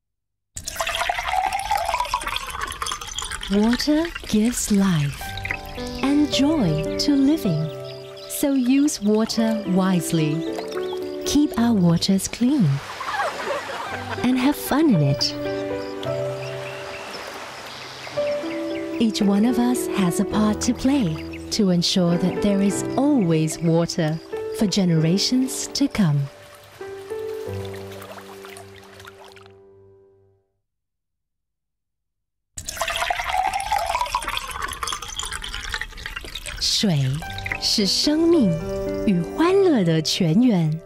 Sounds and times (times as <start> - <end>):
Gurgling: 0.6 - 6.8, 32.6 - 37.9
Stream: 0.6 - 21.5, 22.7 - 29.6, 32.6 - 39.4
Speech: 3.5 - 5.2, 6.0 - 7.7, 8.4 - 10.4, 11.3 - 12.8, 14.2 - 15.4, 19.0 - 26.3, 36.6 - 40.8
Music: 4.3 - 12.8, 13.4 - 30.5, 36.8 - 40.8.